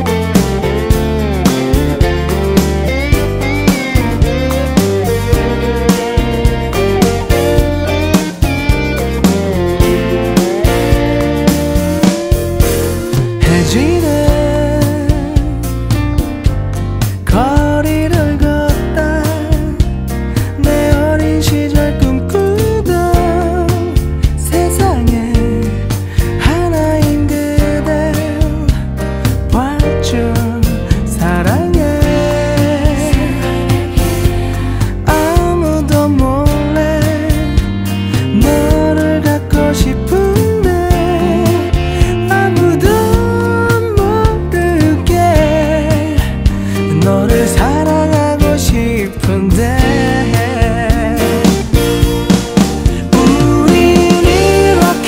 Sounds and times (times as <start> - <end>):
Music: 0.0 - 55.0.